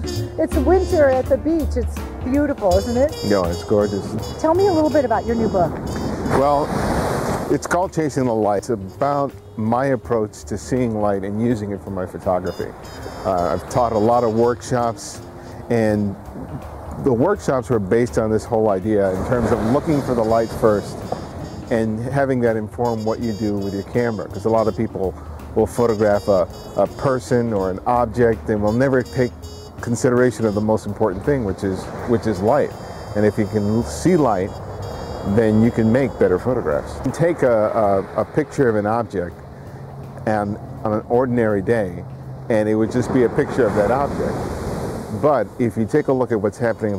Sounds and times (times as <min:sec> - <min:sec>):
Music: 0:00.0 - 0:06.6, 0:07.5 - 0:42.4
Speech: 0:00.4 - 0:05.7, 0:06.3 - 0:06.7, 0:07.5 - 0:12.7, 0:13.3 - 0:16.2, 0:17.0 - 0:20.9, 0:21.7 - 0:34.5, 0:35.3 - 0:39.3, 0:40.3 - 0:44.4, 0:45.1 - 0:46.9.